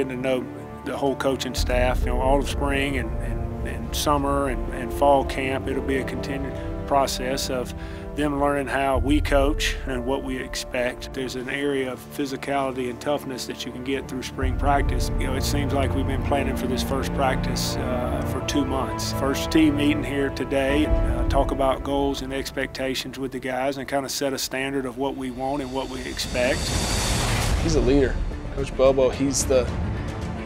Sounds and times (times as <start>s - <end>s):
Speech: 0.0s - 26.7s, 27.6s - 29.8s
Music: 0.0s - 30.4s.